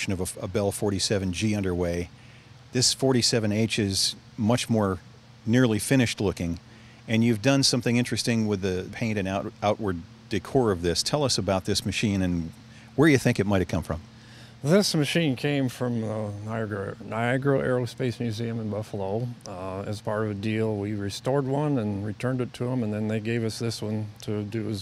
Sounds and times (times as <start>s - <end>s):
Speech: 0.0s - 2.1s, 2.7s - 24.8s.